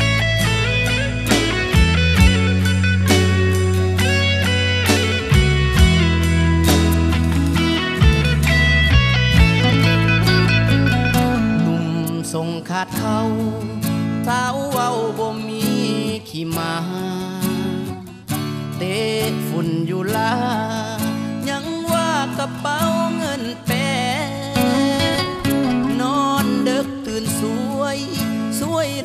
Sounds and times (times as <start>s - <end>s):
New-age music: 0.0s - 12.4s, 24.6s - 27.2s
Middle Eastern music: 0.0s - 15.9s, 21.5s - 29.0s
Country: 0.0s - 29.0s
Independent music: 0.0s - 29.0s.